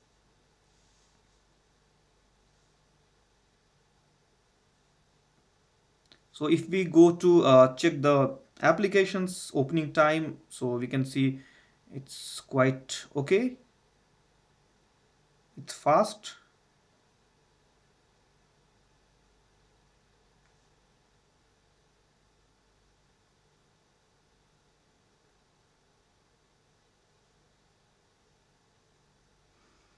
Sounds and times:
Speech: 0:06.3 - 0:13.7, 0:15.6 - 0:16.5.

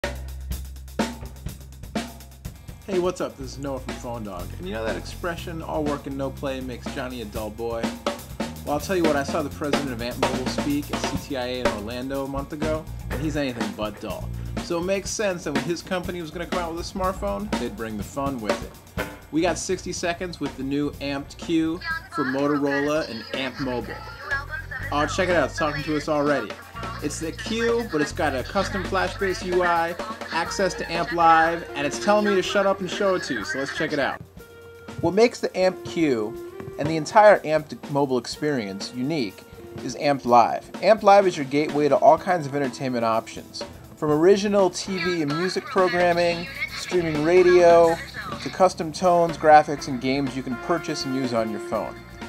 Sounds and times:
Speech: 0:02.9 - 0:07.9, 0:08.7 - 0:18.7, 0:19.4 - 0:34.2, 0:35.0 - 0:51.9
Snare drum: 0:02.9 - 0:21.6, 0:24.9 - 0:34.2.

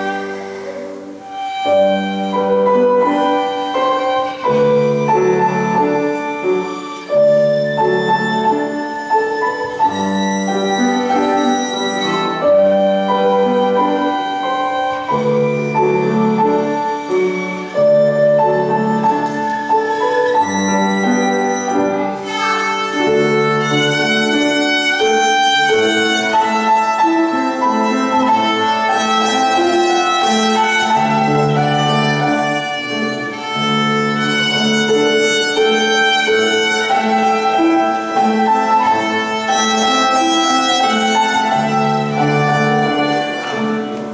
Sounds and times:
Violin, fiddle: 0:00.0 - 0:44.1.

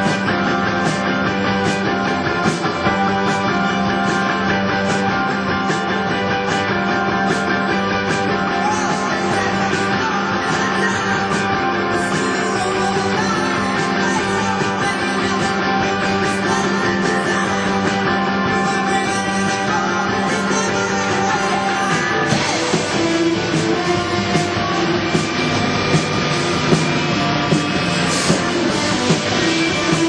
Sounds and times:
Music: 0:00.0 - 0:30.0.

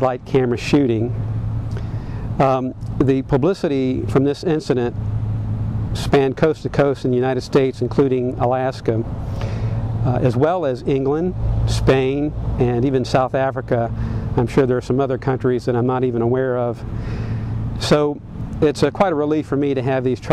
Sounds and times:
Speech: 0:00.0 - 0:01.2, 0:02.4 - 0:05.0, 0:06.0 - 0:09.1, 0:10.0 - 0:16.8, 0:17.8 - 0:20.3.

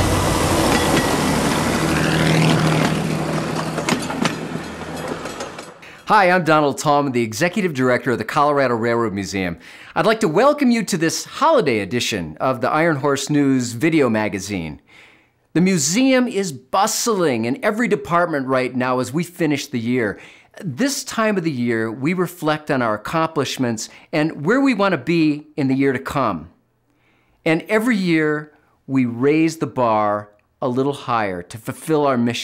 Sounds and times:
Speech: 0:06.1 - 0:14.8, 0:15.6 - 0:26.6, 0:27.5 - 0:32.4.

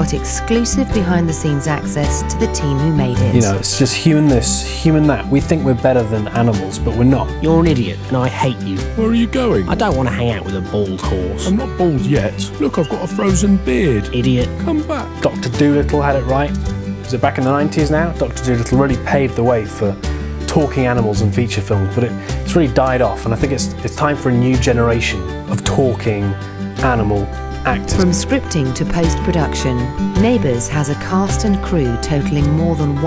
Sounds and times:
Music: 0:00.0 - 0:33.0
Speech: 0:00.0 - 0:33.0.

